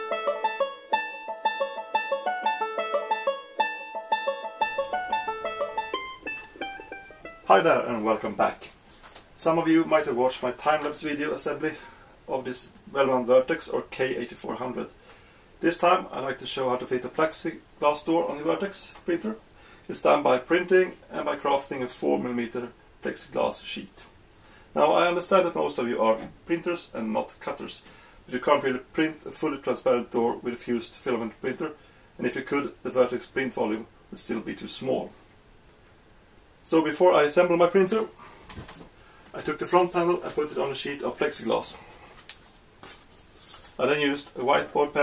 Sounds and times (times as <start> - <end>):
Speech: 7.5 - 8.8, 9.4 - 15.0, 15.6 - 24.2, 24.8 - 35.2, 36.6 - 38.2, 39.3 - 41.8, 43.8 - 45.0.